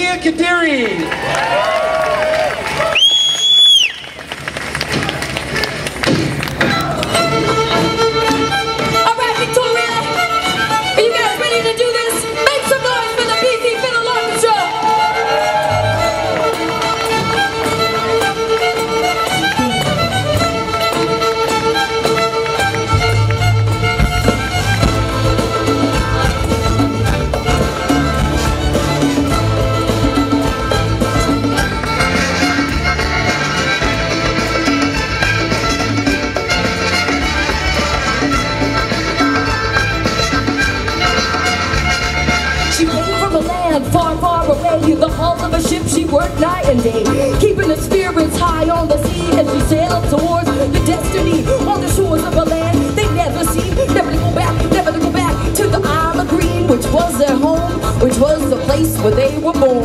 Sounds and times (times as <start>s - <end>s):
Orchestra: 0.0s - 59.8s
Violin, fiddle: 7.1s - 58.5s.